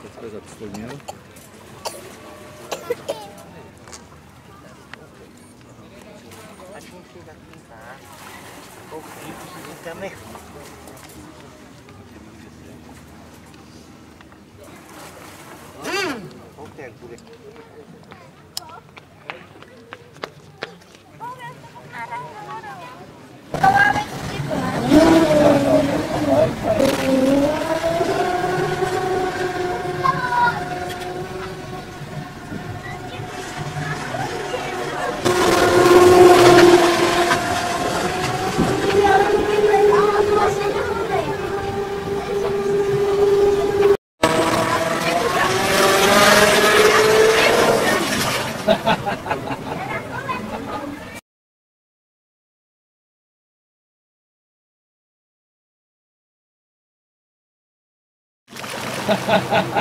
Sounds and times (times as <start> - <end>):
Speech: 15.8 - 25.0, 38.9 - 43.0.